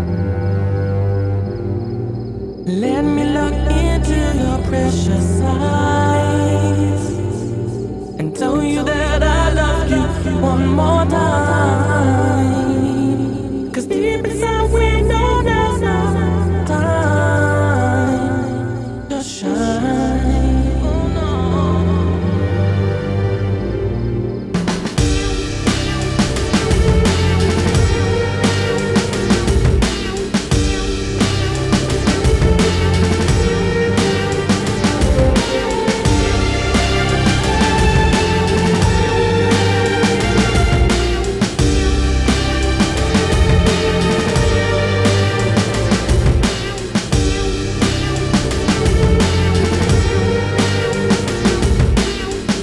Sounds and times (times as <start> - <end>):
Music: 0.0 - 52.6.